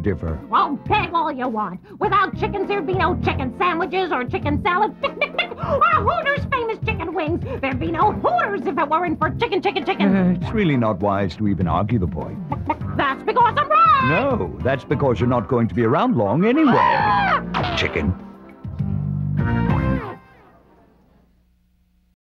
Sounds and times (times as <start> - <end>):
Music: 0.0 - 21.4
Speech: 7.7 - 12.3, 13.0 - 17.0.